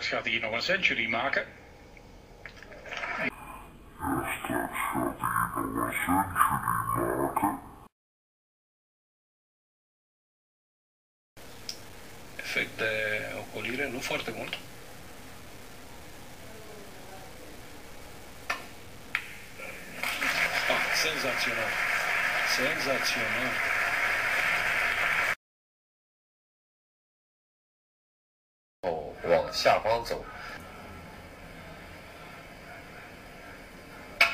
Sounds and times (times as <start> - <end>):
Speech: 0.0 - 1.6, 3.2 - 7.7, 12.4 - 14.7, 20.6 - 21.8, 22.4 - 23.6, 28.8 - 30.6.